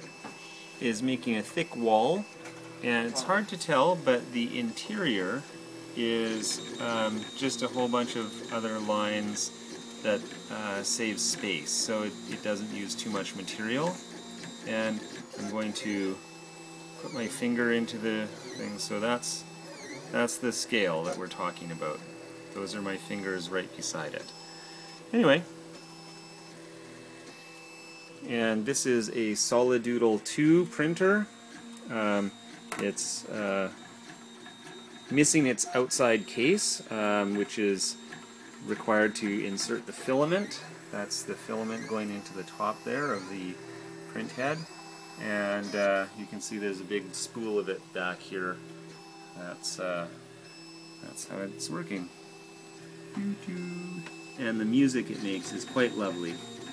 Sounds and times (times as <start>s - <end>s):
Printer: 0.0s - 56.7s
Speech: 0.8s - 14.0s, 14.6s - 16.2s, 17.0s - 19.5s, 20.1s - 22.0s, 22.6s - 24.3s, 25.1s - 25.5s, 28.2s - 31.3s, 31.9s - 33.8s, 35.1s - 38.0s, 38.6s - 48.6s, 49.4s - 50.2s, 51.0s - 52.1s, 53.2s - 56.4s.